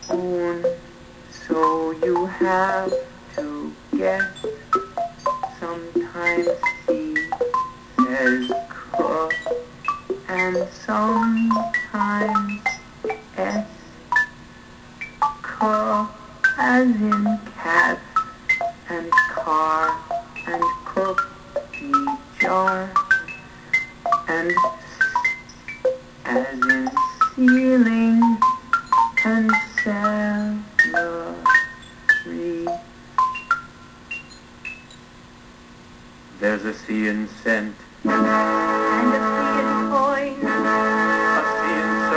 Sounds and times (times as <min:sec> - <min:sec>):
Inside, small room: 0:00.0 - 0:42.1
Speech: 0:00.1 - 0:00.8, 0:01.4 - 0:04.3, 0:05.6 - 0:07.3, 0:08.0 - 0:09.4, 0:13.4 - 0:13.8, 0:18.9 - 0:21.2, 0:21.8 - 0:23.0, 0:24.3 - 0:25.0, 0:26.3 - 0:28.4, 0:29.3 - 0:31.5, 0:32.3 - 0:32.7, 0:36.4 - 0:37.8
Music: 0:01.5 - 0:14.3, 0:15.0 - 0:17.5, 0:18.2 - 0:29.9, 0:38.0 - 0:42.1.